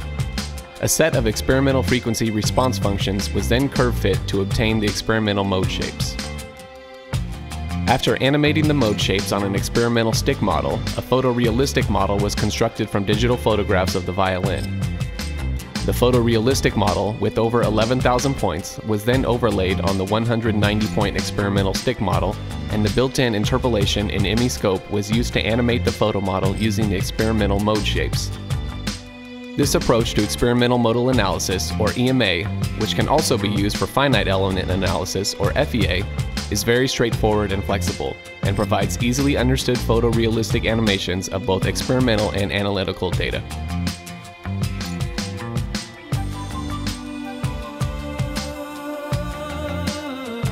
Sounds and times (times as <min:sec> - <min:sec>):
Speech: 0:00.8 - 0:06.2, 0:07.9 - 0:14.7, 0:15.8 - 0:28.4, 0:29.6 - 0:43.5.